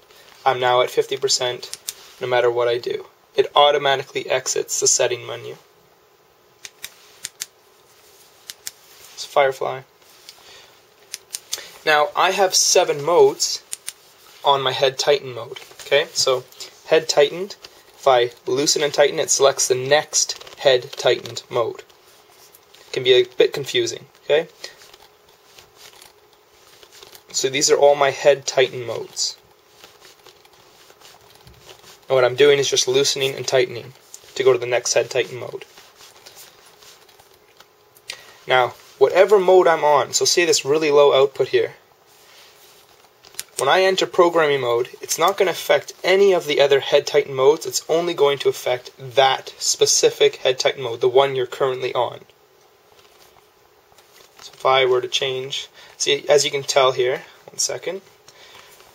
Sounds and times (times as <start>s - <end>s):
Inside, small room: 0.0s - 58.9s
Speech: 0.4s - 5.7s, 9.2s - 9.9s, 11.8s - 13.7s, 14.4s - 21.9s, 22.9s - 24.8s, 27.3s - 29.4s, 32.1s - 35.7s, 38.5s - 41.8s, 43.6s - 52.3s, 54.4s - 58.1s.